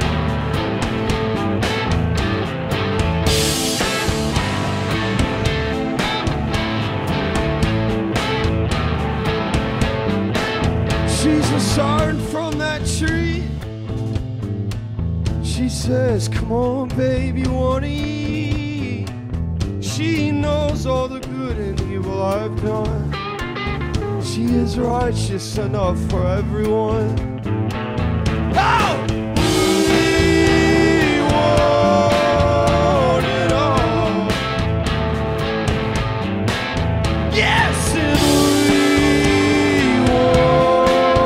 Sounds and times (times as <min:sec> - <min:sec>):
Music: 0:00.0 - 0:41.2.